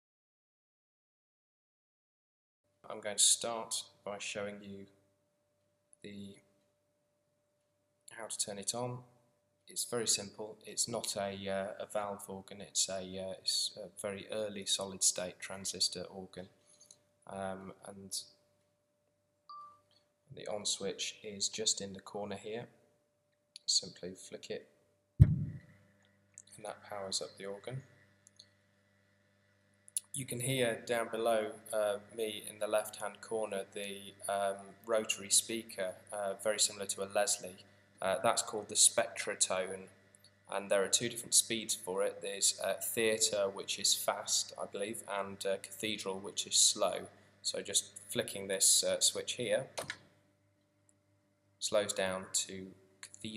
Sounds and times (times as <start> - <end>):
Speech: 2.9 - 4.9, 6.1 - 6.4, 8.1 - 9.0, 9.7 - 16.5, 17.3 - 18.3, 20.3 - 22.7, 23.6 - 24.6, 26.5 - 27.8, 30.0 - 39.9, 40.5 - 49.8, 51.6 - 53.3.